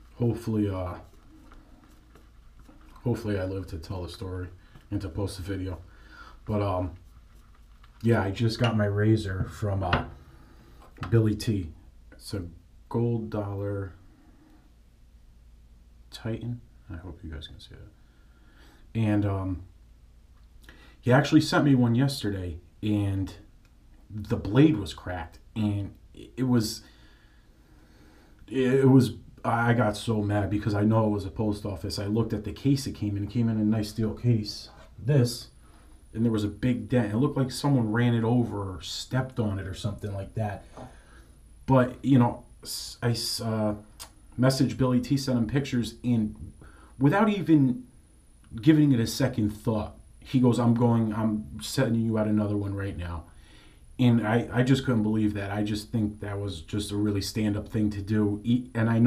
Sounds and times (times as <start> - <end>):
Speech: 0.0 - 1.2, 3.0 - 7.0, 8.0 - 10.2, 11.0 - 14.0, 16.1 - 18.0, 18.9 - 19.7, 21.0 - 23.5, 24.1 - 26.9, 28.5 - 40.8, 41.7 - 47.9, 48.5 - 53.3, 54.0 - 59.0.